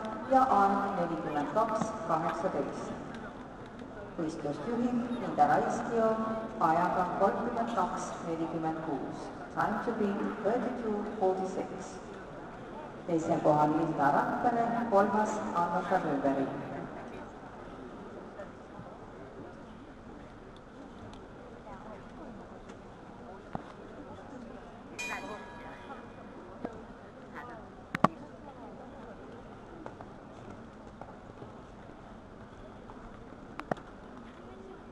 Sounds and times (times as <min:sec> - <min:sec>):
Speech: 0:00.0 - 0:17.4.